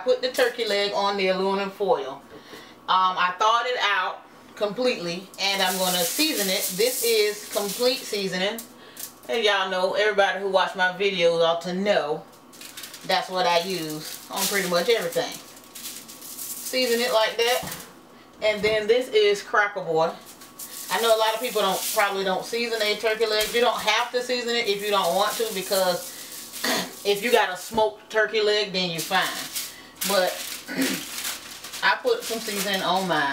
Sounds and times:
Speech: 0:00.0 - 0:02.2, 0:02.9 - 0:08.7, 0:09.3 - 0:12.3, 0:13.0 - 0:15.4, 0:16.7 - 0:17.8, 0:18.4 - 0:20.2, 0:20.9 - 0:26.1, 0:26.7 - 0:30.9, 0:31.8 - 0:33.3.

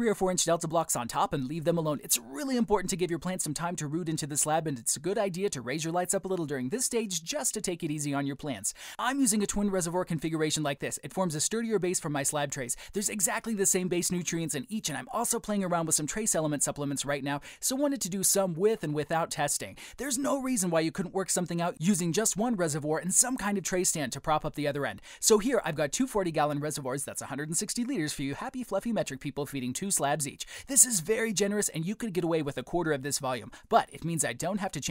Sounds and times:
Speech: 0:00.0 - 0:34.9.

